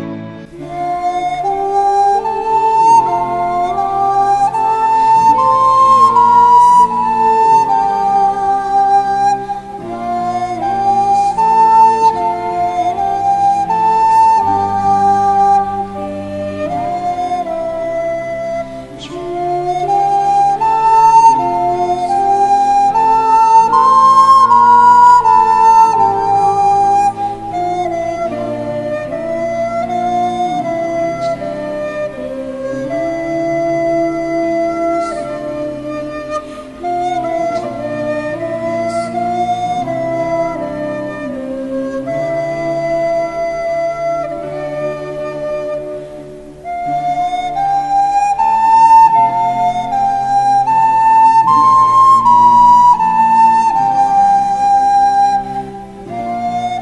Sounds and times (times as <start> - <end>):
Music: 0.0 - 56.8.